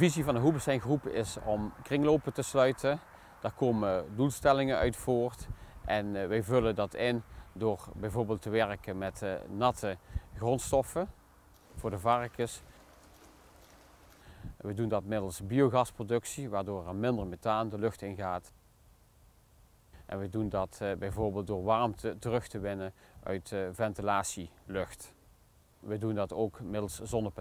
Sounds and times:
Speech: 0.0s - 11.2s, 11.8s - 12.7s, 14.6s - 18.5s, 20.0s - 25.2s, 25.8s - 27.4s.

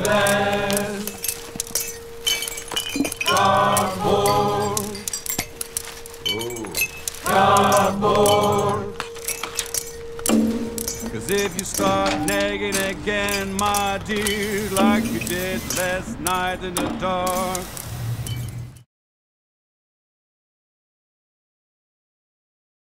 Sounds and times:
Music: 0.0s - 17.7s
Chink, clink: 1.1s - 16.4s.

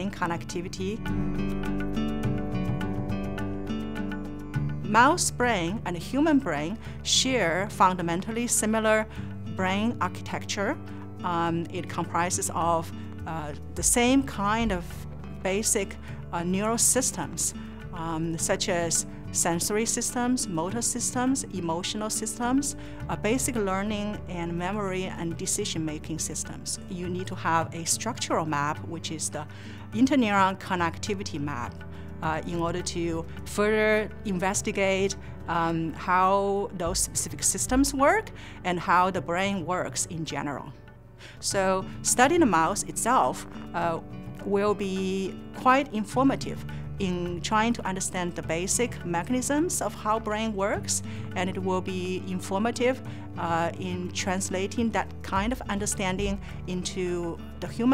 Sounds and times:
Speech: 0.0s - 1.0s, 4.9s - 40.8s, 41.4s - 57.9s
Music: 0.0s - 57.9s.

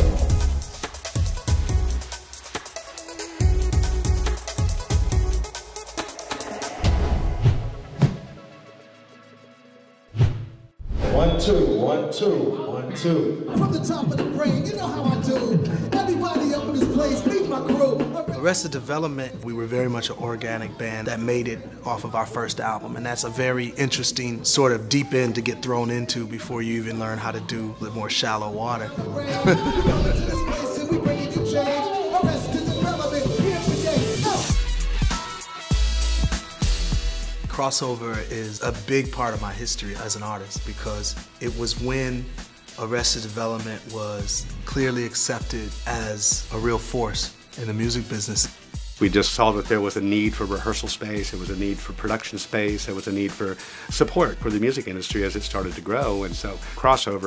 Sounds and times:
Music: 0.0s - 57.2s
Male speech, man speaking: 11.0s - 34.5s, 37.5s - 57.2s.

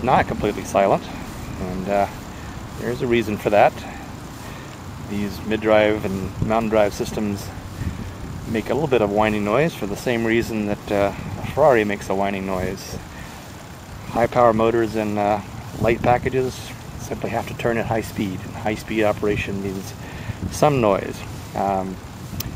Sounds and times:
Speech: 0.0s - 2.2s, 2.8s - 4.0s, 5.1s - 7.6s, 8.5s - 13.0s, 14.0s - 22.0s.

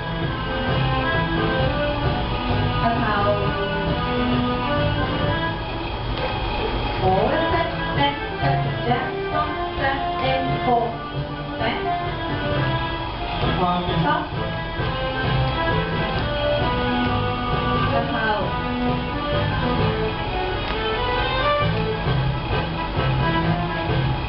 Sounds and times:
Music: 0.0s - 24.2s.

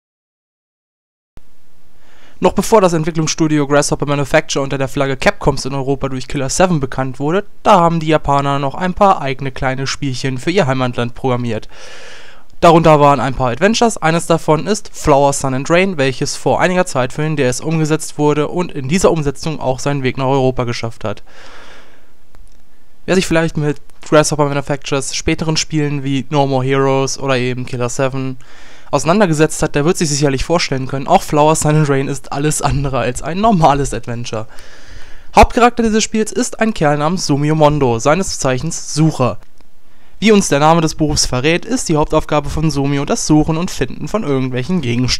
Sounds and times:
Speech: 2.4s - 11.7s, 12.6s - 21.2s, 23.1s - 34.5s, 35.4s - 39.5s, 40.2s - 45.1s.

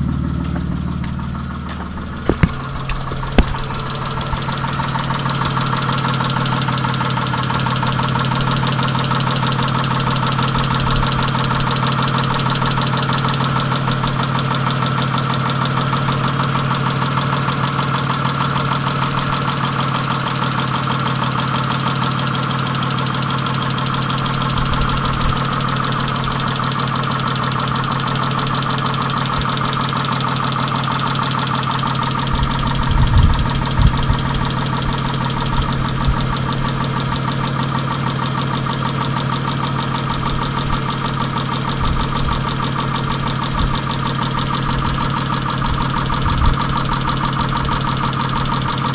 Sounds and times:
Engine: 0.0s - 48.9s
Vehicle: 0.0s - 48.9s.

